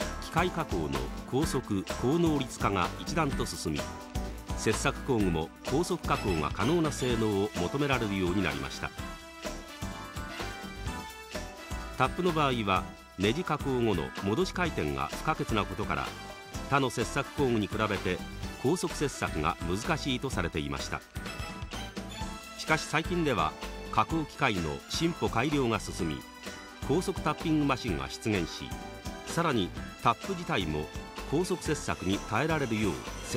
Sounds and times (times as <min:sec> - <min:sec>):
Music: 0:00.0 - 0:33.3
Speech: 0:00.2 - 0:03.9, 0:04.6 - 0:09.0, 0:12.0 - 0:21.1, 0:22.6 - 0:26.2, 0:26.9 - 0:28.7, 0:29.3 - 0:33.3.